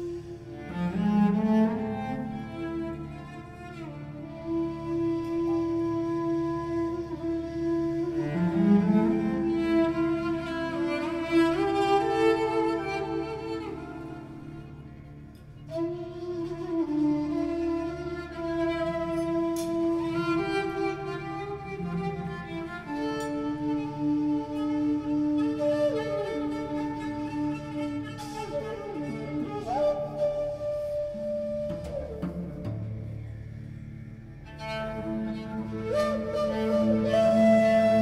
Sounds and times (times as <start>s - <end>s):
Cello: 0.0s - 38.0s.